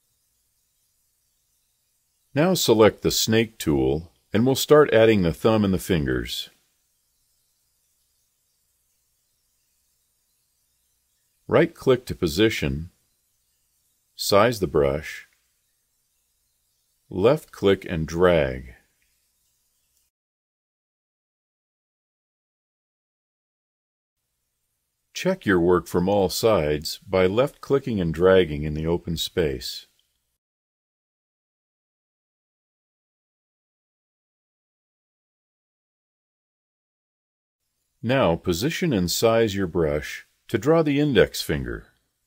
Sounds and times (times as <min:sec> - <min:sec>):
Speech: 0:02.4 - 0:06.6, 0:11.5 - 0:13.0, 0:14.2 - 0:15.3, 0:17.1 - 0:18.8, 0:25.2 - 0:29.9, 0:38.0 - 0:41.9.